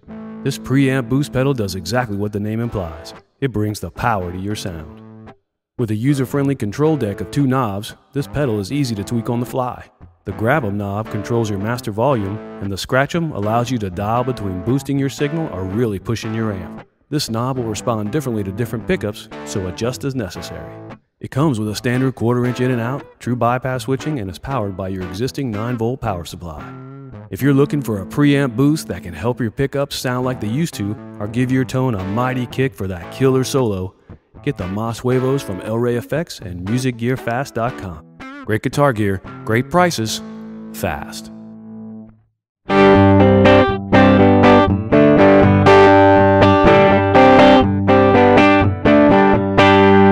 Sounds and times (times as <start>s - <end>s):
Guitar: 0.0s - 50.1s
Speech: 0.4s - 5.0s, 5.8s - 26.7s, 27.4s - 41.3s.